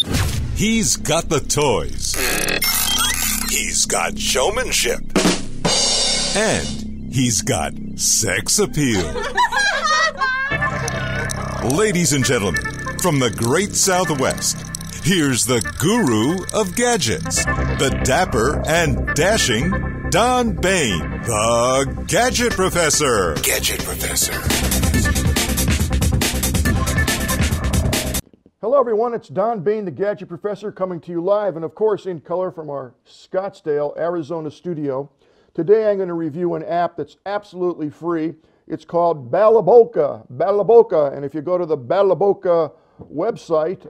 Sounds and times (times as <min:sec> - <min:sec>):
Speech: 0:00.6 - 0:02.3, 0:03.4 - 0:05.2, 0:06.4 - 0:09.2, 0:11.6 - 0:24.5, 0:28.6 - 0:43.8.